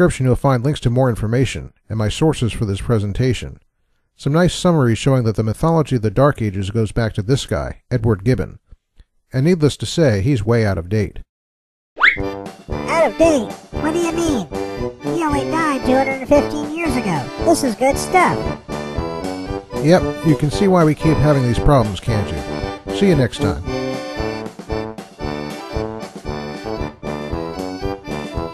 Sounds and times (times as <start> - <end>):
Speech: 0.0 - 3.6, 4.2 - 8.6, 9.3 - 11.3, 12.9 - 14.5, 15.1 - 18.5, 19.8 - 23.7
Music: 12.2 - 28.5.